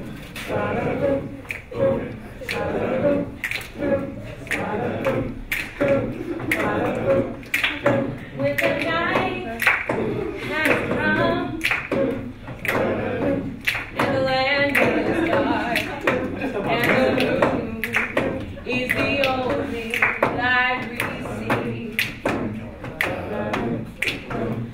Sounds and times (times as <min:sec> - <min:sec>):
Female singing: 0:06.6 - 0:12.0, 0:13.9 - 0:22.3.